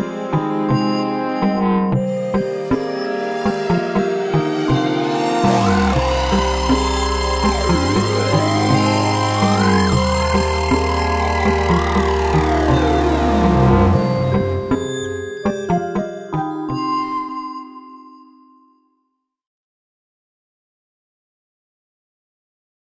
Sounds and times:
Music: 0:00.0 - 0:19.5.

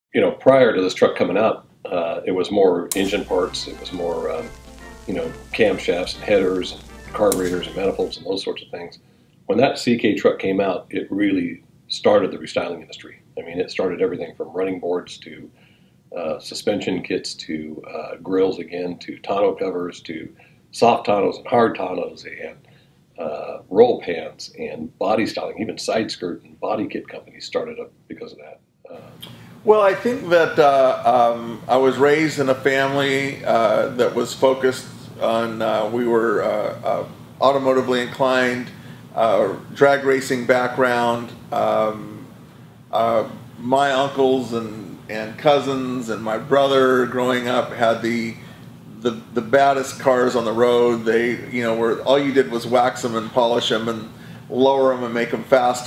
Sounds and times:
Speech: 0:00.1 - 0:15.6, 0:16.2 - 0:22.6, 0:23.2 - 0:42.3, 0:42.9 - 0:55.8
Music: 0:03.0 - 0:08.2.

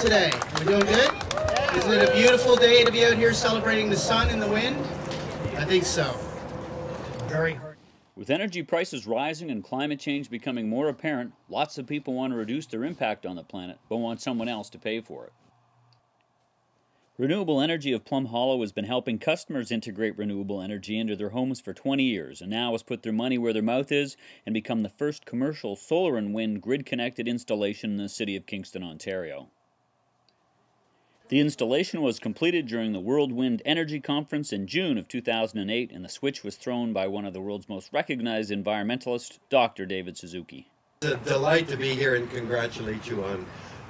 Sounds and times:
Speech: 0:07.3 - 0:15.3, 0:17.2 - 0:29.5, 0:31.3 - 0:43.5.

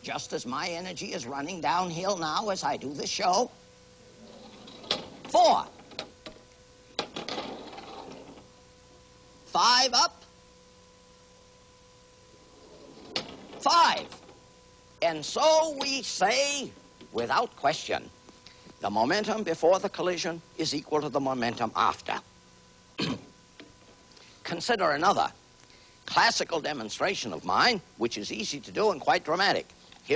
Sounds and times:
Speech: 0:00.0 - 0:03.6, 0:05.3 - 0:05.8, 0:09.5 - 0:10.3, 0:13.6 - 0:14.2, 0:15.0 - 0:18.1, 0:18.8 - 0:22.3, 0:24.4 - 0:25.4, 0:26.1 - 0:30.1.

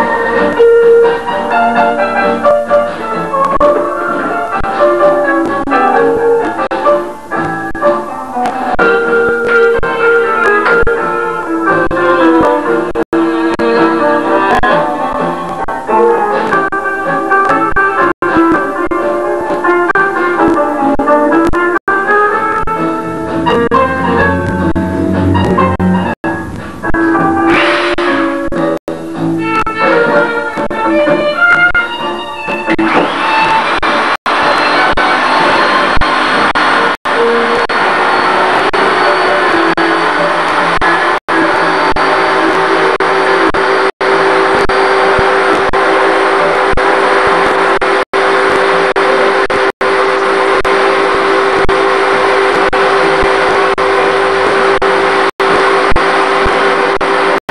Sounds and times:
Music: 0:00.0 - 0:57.4.

